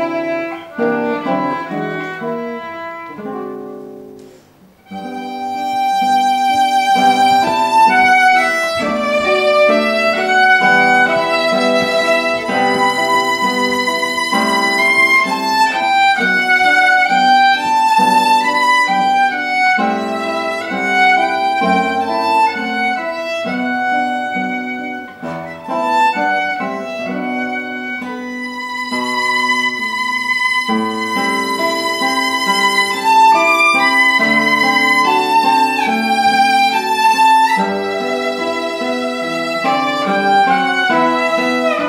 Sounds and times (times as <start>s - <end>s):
Violin, fiddle: 0.0s - 4.0s, 4.8s - 41.8s
Guitar: 0.0s - 41.8s.